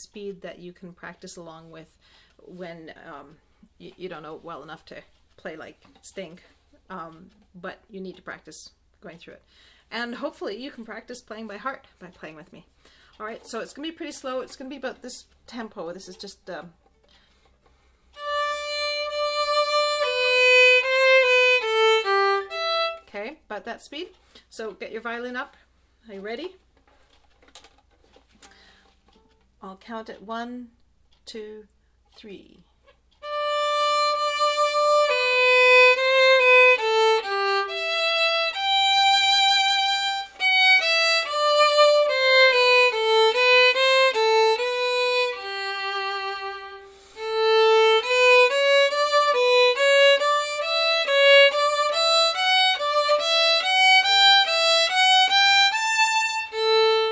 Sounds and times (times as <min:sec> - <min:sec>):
Speech: 0:00.0 - 0:16.8, 0:23.1 - 0:26.6, 0:29.6 - 0:32.7
Violin, fiddle: 0:17.4 - 0:23.1, 0:33.2 - 0:57.1.